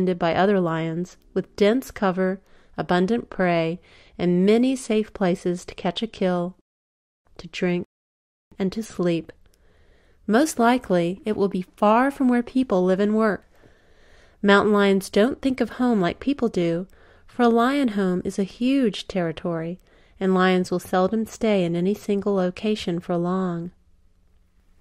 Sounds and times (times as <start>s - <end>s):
Speech: 0.0s - 6.6s, 7.4s - 7.9s, 8.6s - 9.4s, 10.3s - 13.4s, 14.4s - 23.8s.